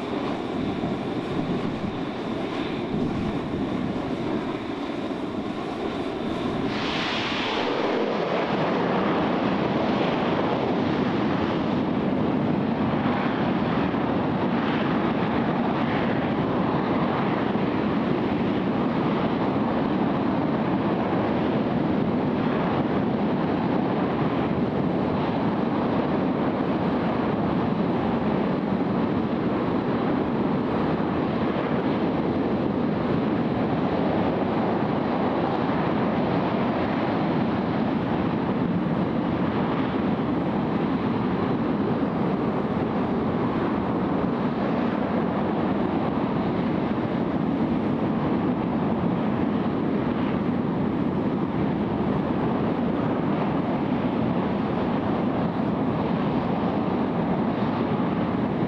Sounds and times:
Heavy engine (low frequency): 0.0s - 58.6s.

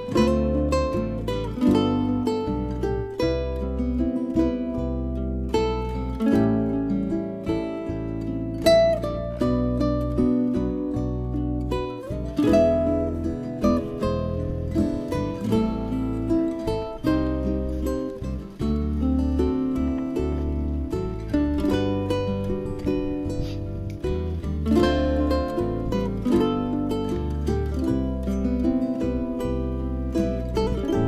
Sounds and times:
Music: 0.0s - 31.0s.

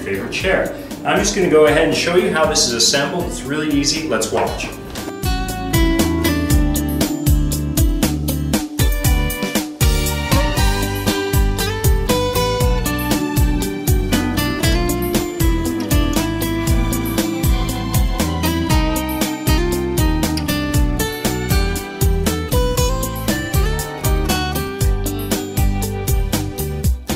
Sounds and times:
Music: 0.0s - 27.1s.

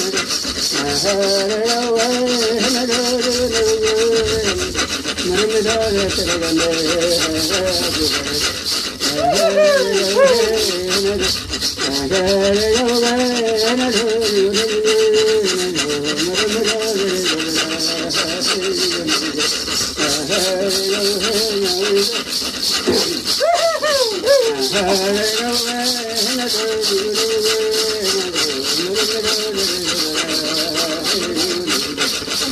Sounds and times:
Filing (rasp): 0.0s - 32.5s
Rub: 0.0s - 32.5s.

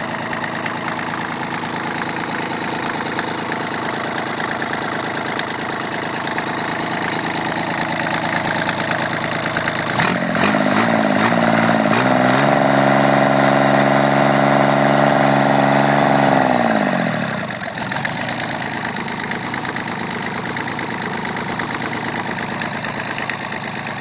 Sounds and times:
Engine: 0.0s - 24.0s.

